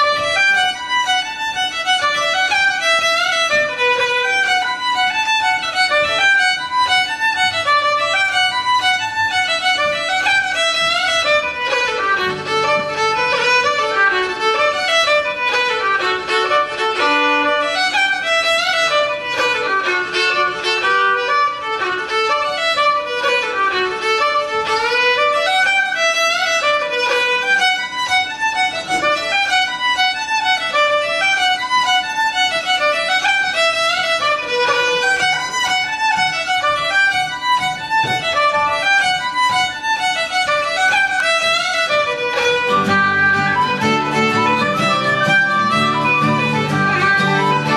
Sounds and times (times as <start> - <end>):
Violin, fiddle: 0.0 - 47.7.